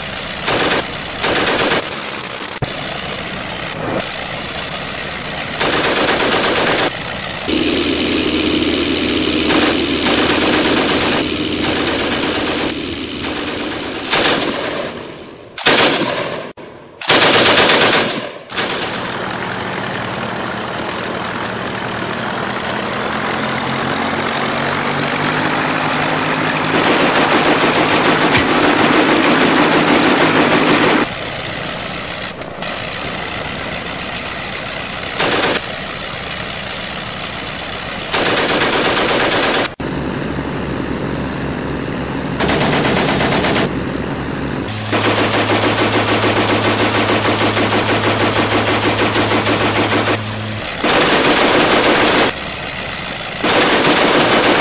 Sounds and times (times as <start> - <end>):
Engine knocking: 0.0 - 3.3, 4.0 - 14.8, 17.1 - 32.3, 32.9 - 39.8, 44.7 - 54.6.